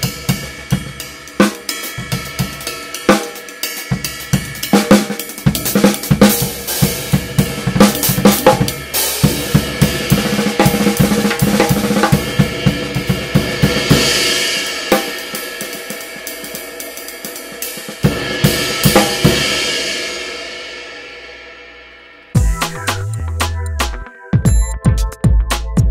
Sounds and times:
Hi-hat: 0:00.0 - 0:11.4, 0:22.4 - 0:24.0
Snare drum: 0:00.0 - 0:16.6, 0:17.2 - 0:19.6, 0:22.4 - 0:25.9
Drum kit: 0:00.0 - 0:25.9.

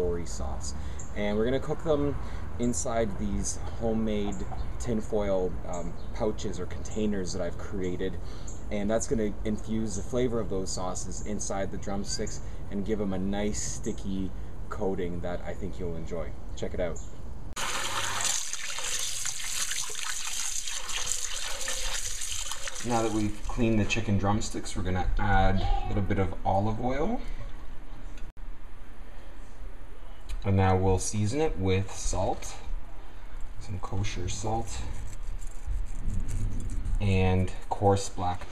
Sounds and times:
Speech: 0:00.0 - 0:17.0, 0:22.9 - 0:27.2, 0:30.4 - 0:32.7, 0:33.6 - 0:34.9, 0:37.0 - 0:38.5
Water: 0:17.6 - 0:23.6.

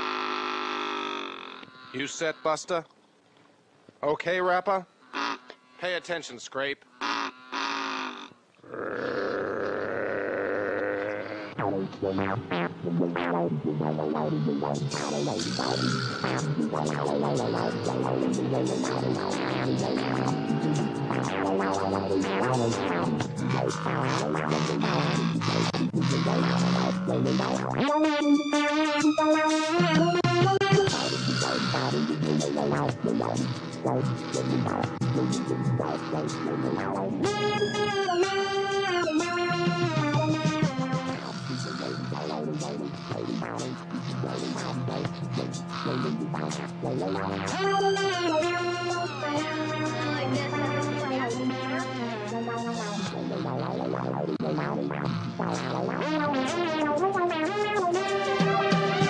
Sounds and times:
Speech: 0:01.9 - 0:02.9, 0:04.0 - 0:04.9, 0:05.8 - 0:06.8, 0:50.0 - 0:53.0
Music: 0:11.6 - 0:59.1.

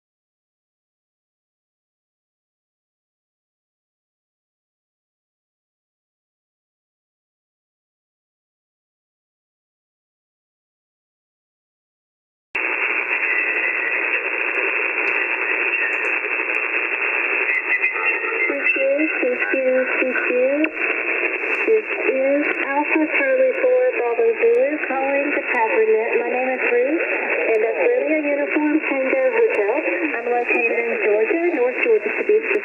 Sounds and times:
Radio: 0:12.6 - 0:32.6.

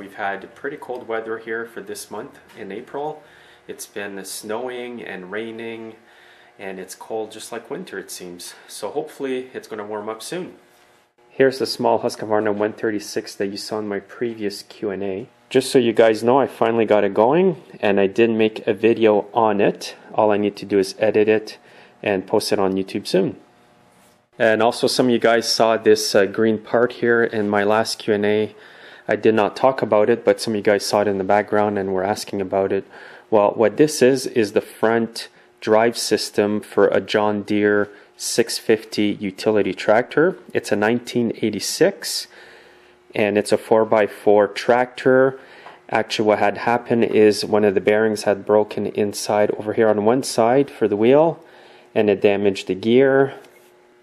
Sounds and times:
Speech: 0:00.0 - 0:06.0, 0:06.6 - 0:10.6, 0:11.4 - 0:23.4, 0:24.4 - 0:42.3, 0:43.1 - 0:51.4, 0:52.0 - 0:53.5.

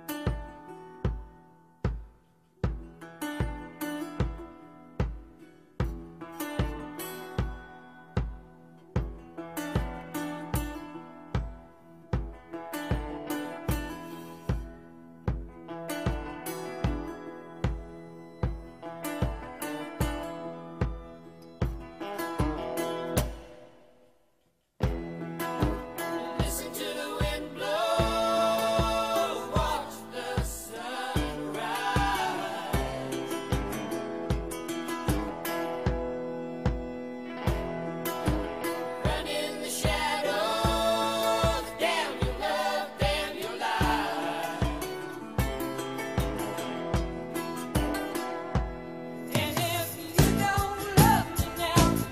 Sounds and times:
Music: 0:00.0 - 0:52.1.

